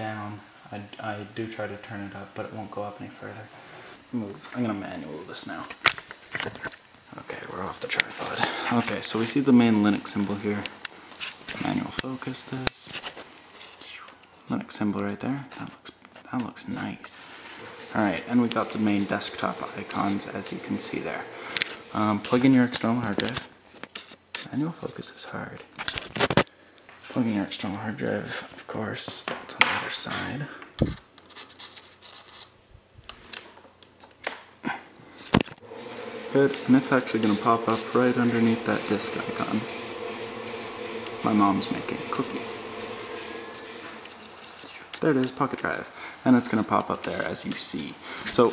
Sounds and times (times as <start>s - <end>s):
Speech: 0.0s - 3.5s, 4.1s - 5.8s, 7.1s - 10.7s, 11.5s - 13.0s, 13.8s - 17.2s, 17.9s - 21.3s, 21.9s - 23.5s, 24.4s - 25.7s, 27.1s - 30.6s, 36.3s - 39.8s, 41.1s - 42.7s, 44.6s - 48.5s
Inside, small room: 0.0s - 48.5s.